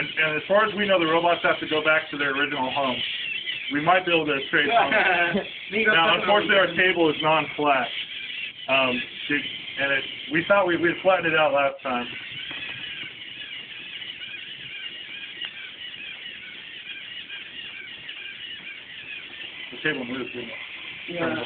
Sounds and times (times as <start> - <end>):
Speech: 3.7 - 7.9.